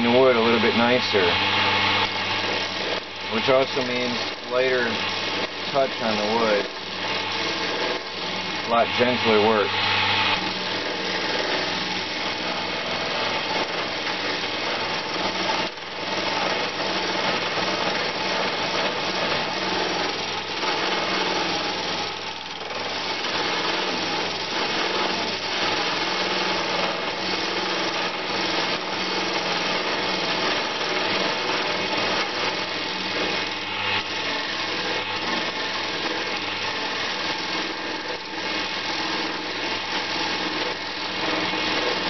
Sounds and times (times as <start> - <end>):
Filing (rasp): 0.0 - 42.0.